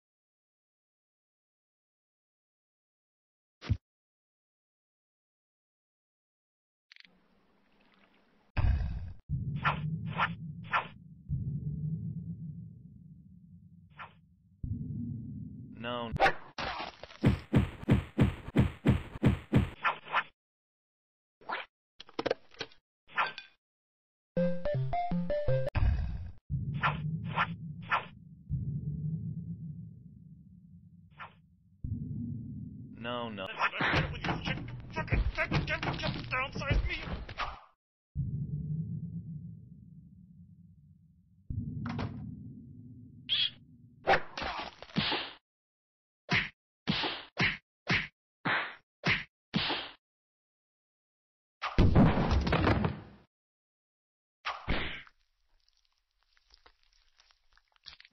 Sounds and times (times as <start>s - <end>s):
Whack, thwack: 16.2s - 20.0s, 44.1s - 45.4s, 46.3s - 50.0s, 51.6s - 53.1s, 54.5s - 55.1s.